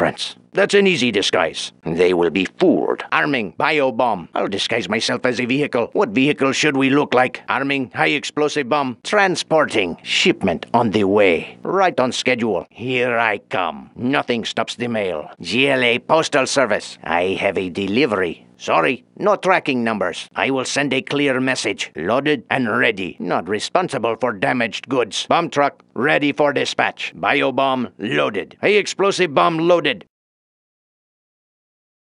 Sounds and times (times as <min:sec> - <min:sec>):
Speech: 0:00.0 - 0:30.2.